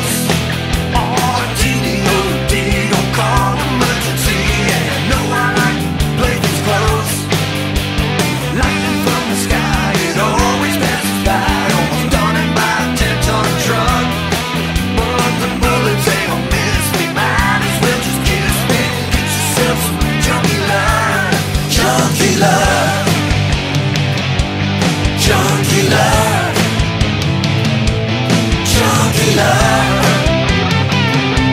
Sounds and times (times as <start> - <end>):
Rhythm and blues: 0.0 - 31.5.